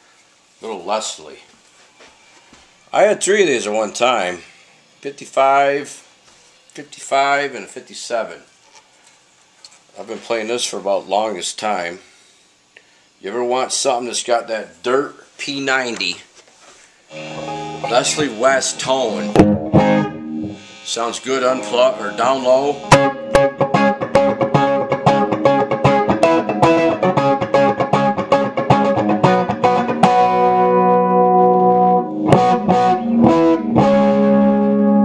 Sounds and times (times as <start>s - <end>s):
Music: 17.1s - 35.0s.